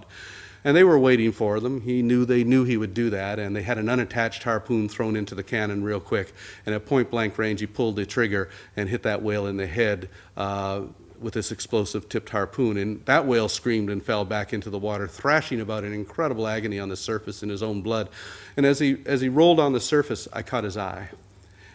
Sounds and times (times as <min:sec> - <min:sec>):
Narration, monologue: 0:00.0 - 0:21.7
Male speech, man speaking: 0:00.7 - 0:21.2.